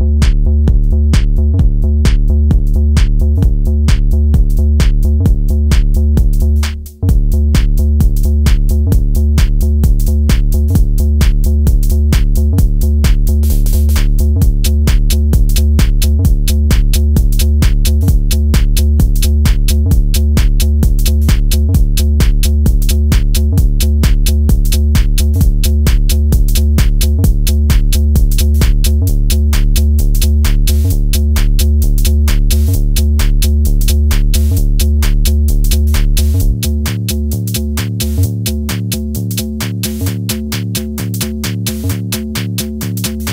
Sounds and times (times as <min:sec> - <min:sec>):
Techno: 0:00.0 - 0:43.3.